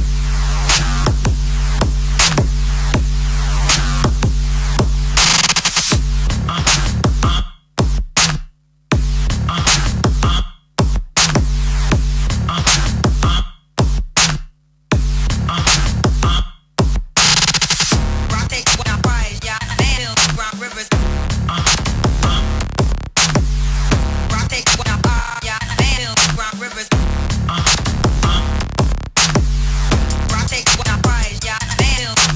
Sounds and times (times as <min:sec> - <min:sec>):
Dubstep: 0:00.0 - 0:07.5, 0:09.0 - 0:14.4, 0:15.0 - 0:16.5, 0:17.2 - 0:32.3.